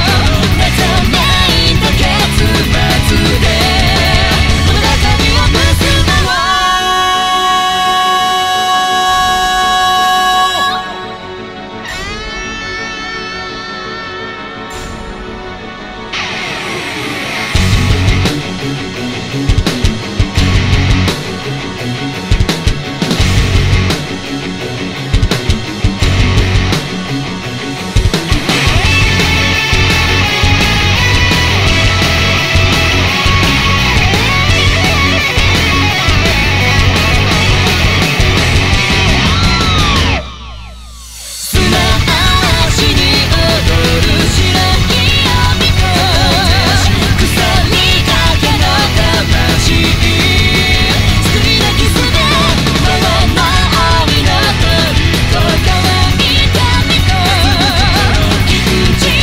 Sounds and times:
Angry music: 0.0s - 59.2s.

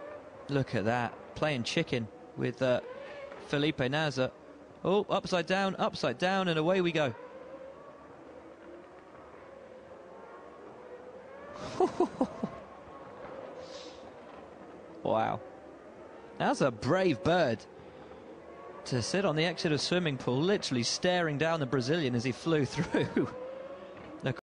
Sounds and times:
Speech: 0.5s - 2.8s, 3.5s - 4.3s, 4.9s - 7.2s, 15.1s - 15.4s, 16.4s - 17.6s, 18.9s - 23.3s, 24.2s - 24.4s.

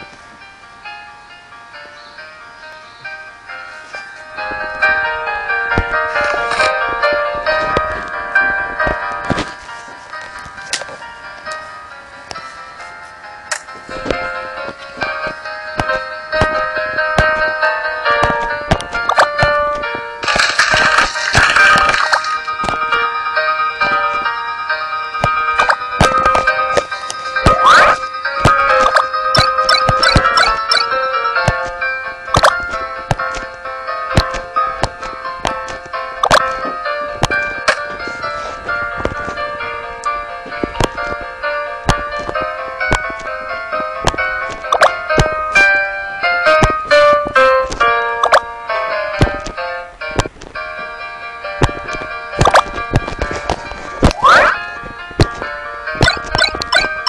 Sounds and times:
Music: 0.0s - 57.0s.

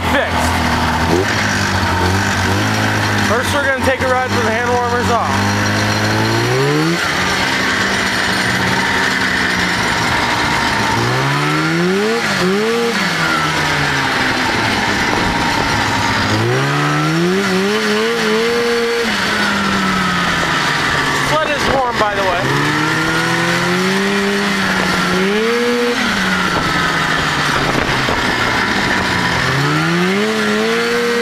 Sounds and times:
Speech: 0.0s - 0.6s, 3.3s - 5.4s, 21.2s - 22.5s.

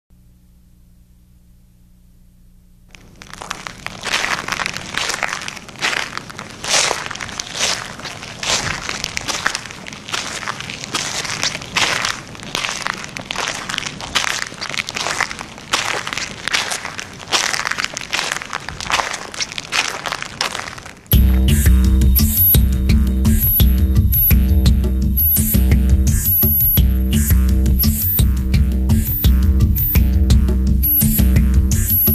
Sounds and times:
Crackle: 1.0s - 21.2s.

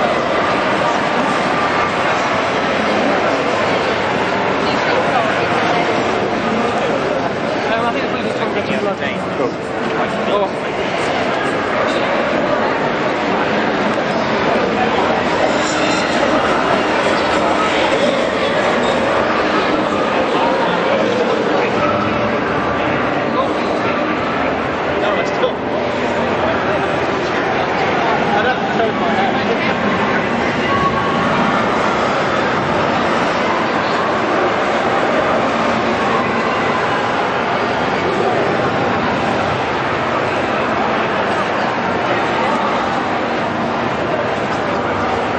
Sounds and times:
Speech: 0.0s - 45.3s.

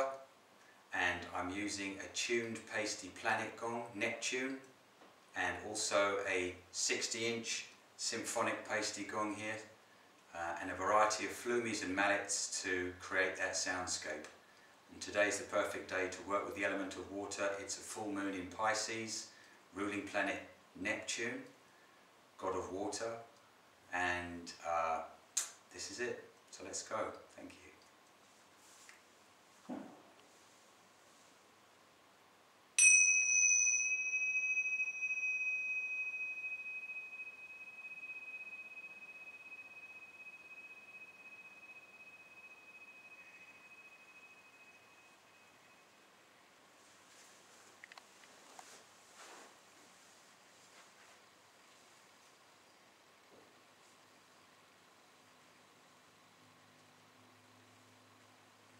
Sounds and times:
Speech: 1.0s - 4.7s, 5.4s - 21.6s, 22.4s - 23.3s, 23.9s - 27.8s.

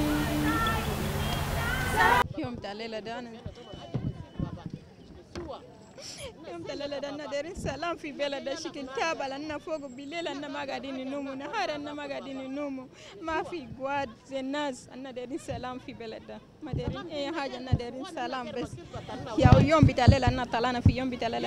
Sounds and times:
Speech: 2.0s - 21.4s.

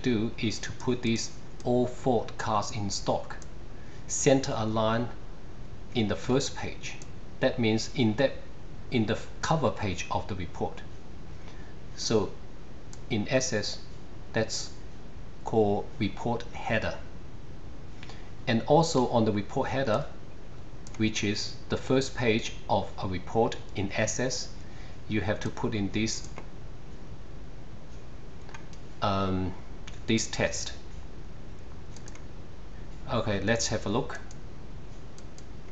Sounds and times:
Speech: 0.0s - 3.4s, 4.1s - 5.2s, 5.9s - 10.9s, 12.0s - 12.4s, 13.1s - 14.8s, 15.4s - 17.1s, 18.4s - 20.2s, 21.0s - 26.4s, 29.0s - 30.9s, 33.0s - 34.3s.

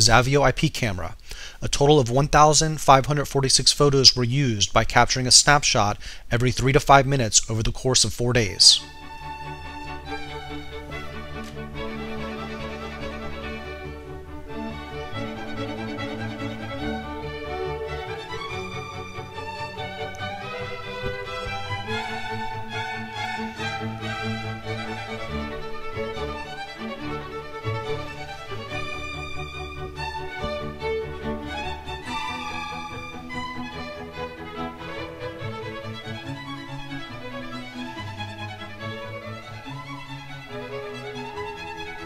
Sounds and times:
Music: 8.6s - 42.0s.

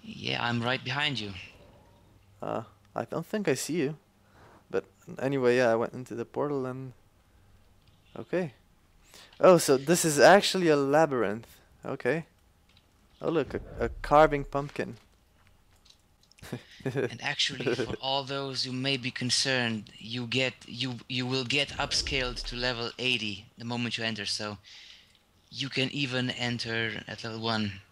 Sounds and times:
Speech: 0.0s - 1.6s, 2.4s - 4.0s, 4.7s - 7.0s, 8.2s - 8.6s, 9.4s - 12.3s, 13.2s - 15.0s, 16.9s - 24.6s, 25.5s - 27.9s.

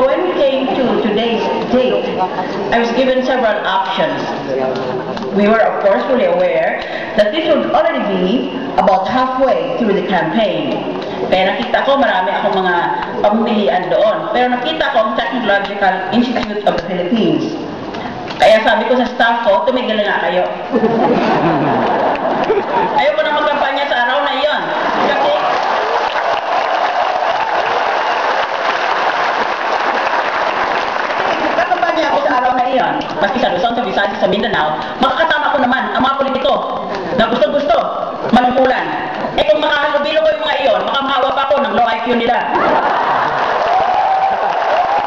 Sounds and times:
Female speech, woman speaking: 0.0s - 4.3s, 5.3s - 17.6s, 18.4s - 20.6s, 23.0s - 25.4s, 31.6s - 42.6s
Narration, monologue: 0.0s - 25.6s, 31.5s - 42.6s.

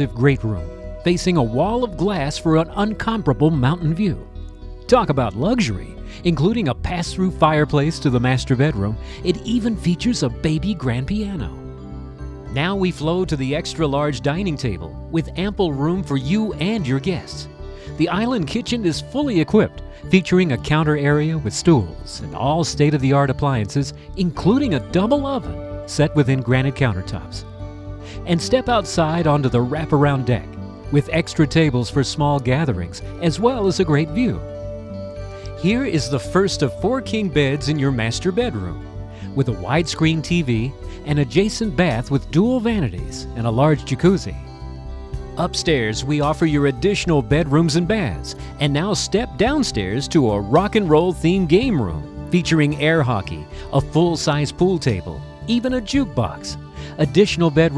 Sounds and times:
Speech: 0.0s - 4.3s, 4.9s - 11.6s, 12.5s - 27.4s, 28.1s - 34.5s, 35.5s - 44.4s, 45.4s - 57.7s
Music: 0.0s - 57.7s.

